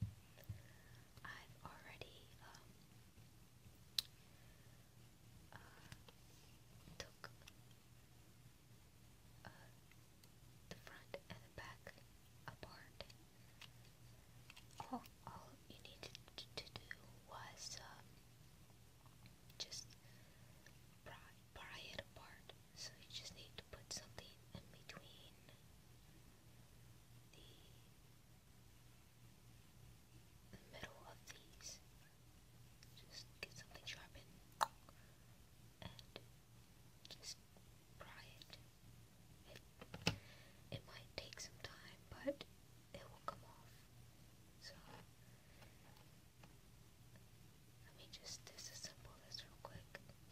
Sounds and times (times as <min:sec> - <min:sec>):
Inside, small room: 0:00.0 - 0:50.3
Whispering: 0:01.2 - 0:02.8, 0:05.5 - 0:06.2, 0:06.9 - 0:07.5, 0:09.4 - 0:09.8, 0:10.7 - 0:13.2, 0:14.8 - 0:18.1, 0:19.6 - 0:20.0, 0:21.0 - 0:25.6, 0:27.3 - 0:27.9, 0:30.5 - 0:31.8, 0:32.8 - 0:34.8, 0:35.8 - 0:36.2, 0:37.0 - 0:37.4, 0:38.0 - 0:38.6, 0:40.7 - 0:43.9, 0:44.6 - 0:45.0, 0:47.8 - 0:50.2.